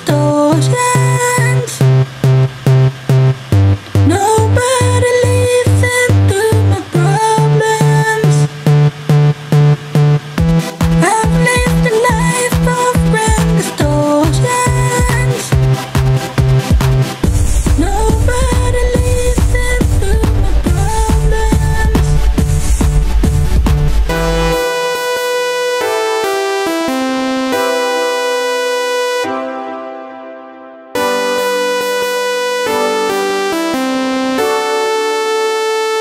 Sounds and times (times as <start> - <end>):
Techno: 0.0 - 30.2, 31.0 - 36.0.